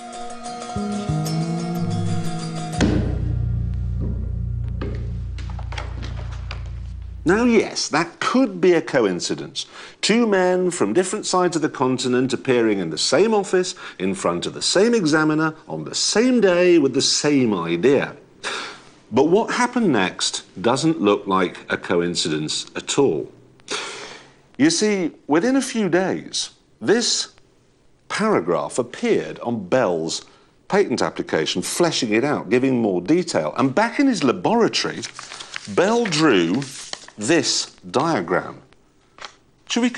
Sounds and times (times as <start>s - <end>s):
Speech: 7.2s - 18.2s, 19.1s - 23.3s, 24.6s - 27.4s, 28.1s - 35.1s, 35.7s - 38.7s, 39.7s - 39.9s.